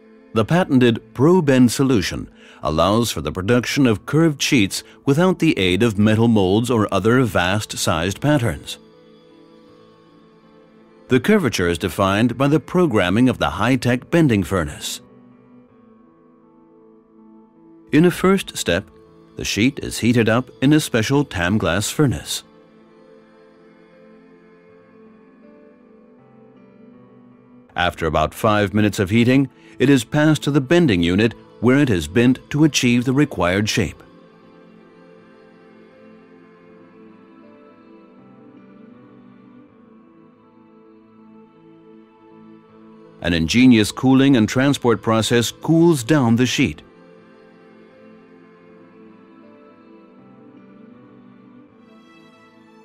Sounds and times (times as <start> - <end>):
Speech: 0.4 - 8.8, 11.1 - 15.0, 18.0 - 22.5, 27.8 - 34.1, 43.2 - 46.8.